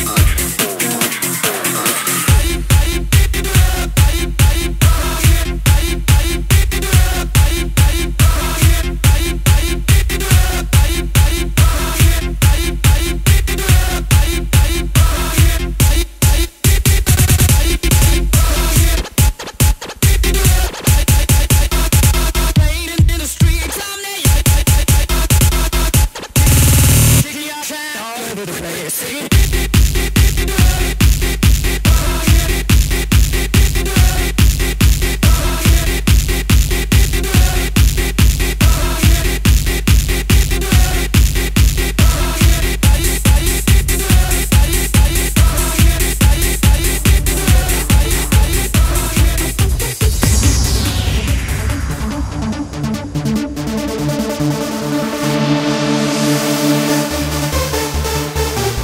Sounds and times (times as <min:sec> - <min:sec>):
Dance music: 0:00.0 - 0:58.8.